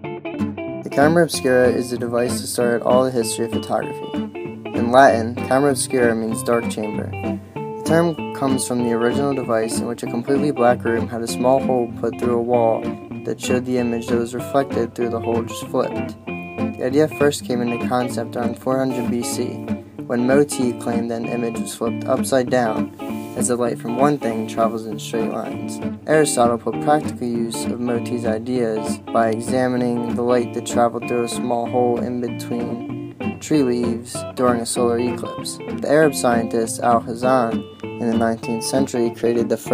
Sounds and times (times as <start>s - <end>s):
Music: 0.0s - 39.7s
Speech: 0.9s - 4.1s, 4.8s - 7.2s, 7.8s - 16.2s, 16.8s - 39.7s.